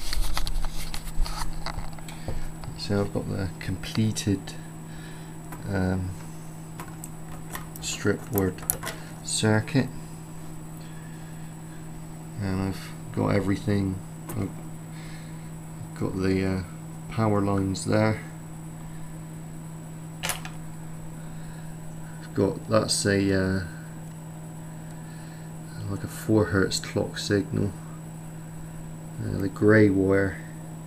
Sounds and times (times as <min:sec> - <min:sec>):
Speech: 0:02.7 - 0:04.6, 0:05.6 - 0:06.2, 0:07.8 - 0:10.0, 0:12.4 - 0:14.6, 0:15.9 - 0:18.4, 0:22.2 - 0:23.8, 0:25.7 - 0:27.8, 0:29.2 - 0:30.6.